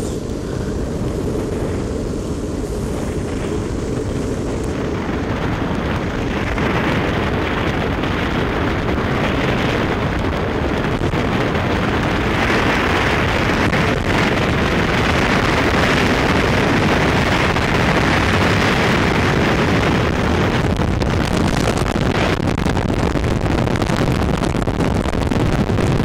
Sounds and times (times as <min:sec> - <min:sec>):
Vehicle: 0:00.0 - 0:26.0.